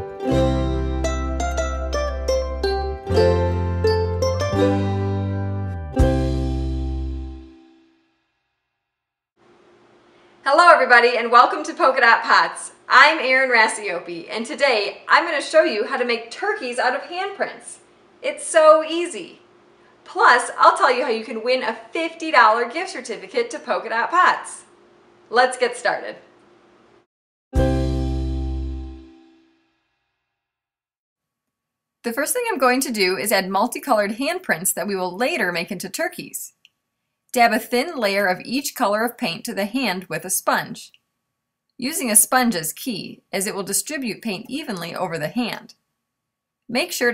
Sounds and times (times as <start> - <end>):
Music: 0.0 - 8.4, 27.6 - 30.1
Speech: 10.5 - 19.4, 20.1 - 24.7, 25.3 - 26.3, 32.1 - 36.6, 37.4 - 40.9, 41.8 - 45.7, 46.7 - 47.1.